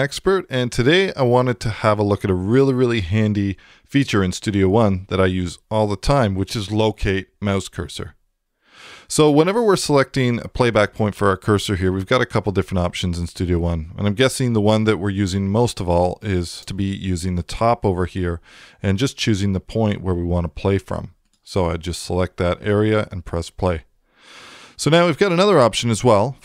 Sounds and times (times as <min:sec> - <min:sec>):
Speech: 0:00.0 - 0:08.2, 0:09.1 - 0:23.9, 0:24.8 - 0:26.4.